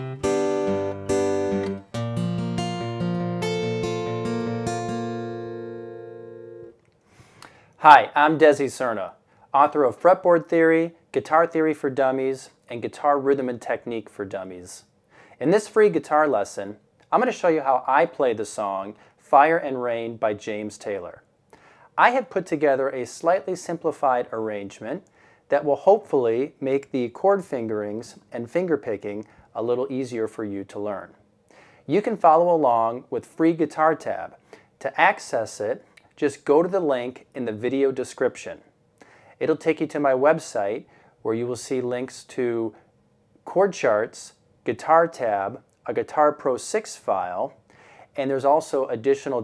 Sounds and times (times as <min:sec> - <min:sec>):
Speech: 0:07.8 - 0:21.3, 0:22.0 - 0:31.2, 0:31.9 - 0:38.7, 0:39.4 - 0:42.8, 0:43.4 - 0:49.4.